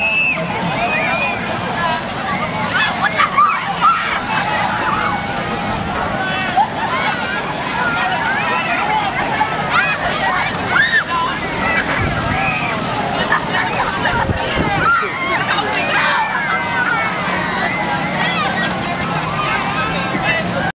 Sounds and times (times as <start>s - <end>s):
Speech: 0.0s - 20.7s.